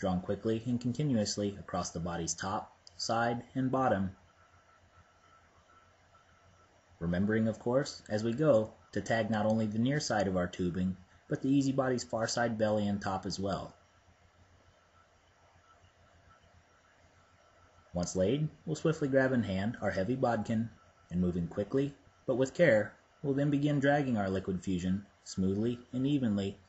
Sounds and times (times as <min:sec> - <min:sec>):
Speech: 0:00.0 - 0:04.2, 0:07.0 - 0:13.8, 0:18.0 - 0:26.6.